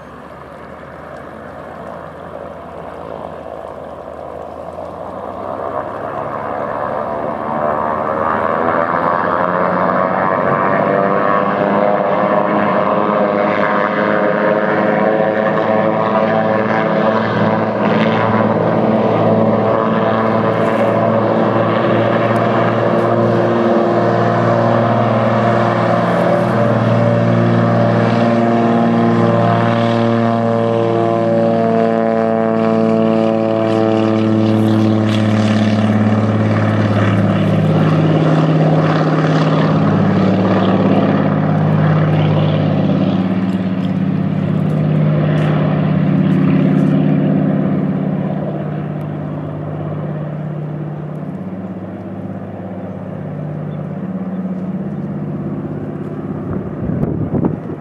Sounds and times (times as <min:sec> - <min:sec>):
Aircraft: 0:00.0 - 0:57.8
Outside, rural or natural: 0:00.0 - 0:57.8.